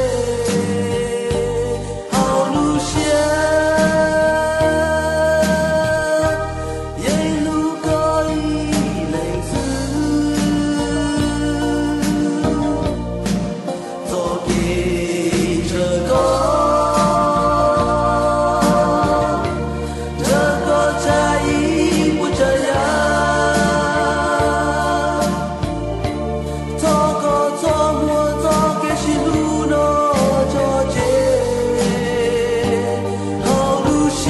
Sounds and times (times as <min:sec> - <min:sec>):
Music: 0:00.0 - 0:34.3.